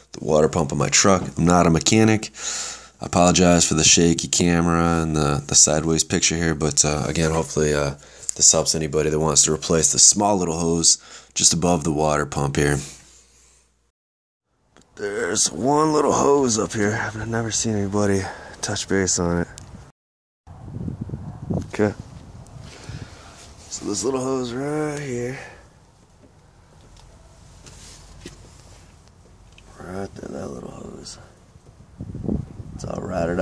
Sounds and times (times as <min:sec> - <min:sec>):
Speech: 0:00.1 - 0:02.4, 0:03.0 - 0:13.0, 0:15.0 - 0:19.6, 0:21.6 - 0:22.0, 0:23.7 - 0:25.6, 0:29.7 - 0:31.3, 0:32.8 - 0:33.4.